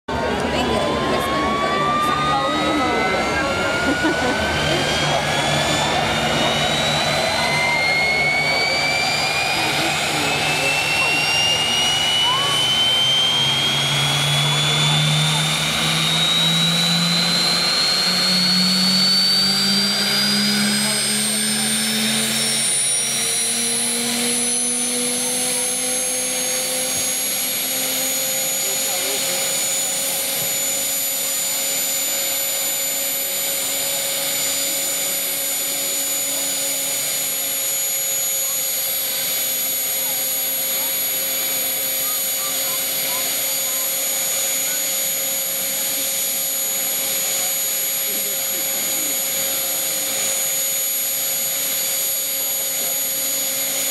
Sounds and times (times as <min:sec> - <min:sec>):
Aircraft: 0:00.1 - 0:53.9.